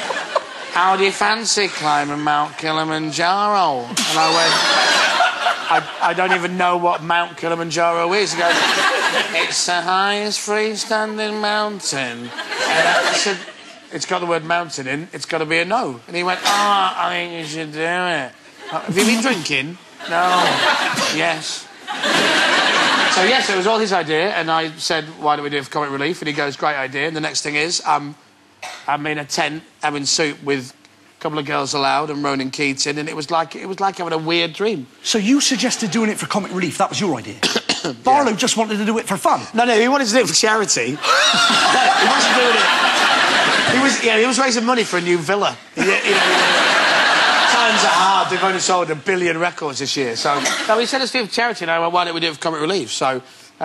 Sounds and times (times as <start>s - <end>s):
Speech: 0.8s - 4.6s, 5.7s - 8.6s, 9.4s - 21.7s, 23.1s - 28.2s, 28.9s - 41.0s, 43.7s - 46.7s, 47.4s - 53.6s.